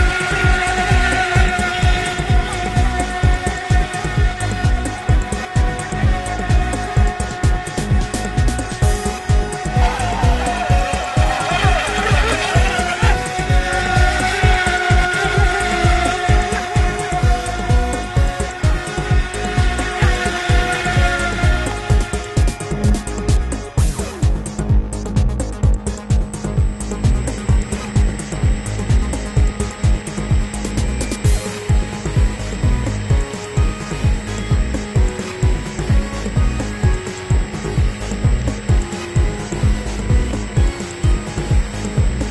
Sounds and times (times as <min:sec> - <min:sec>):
Motorboat, speedboat: 0:00.0 - 0:42.3
Music: 0:00.0 - 0:42.3.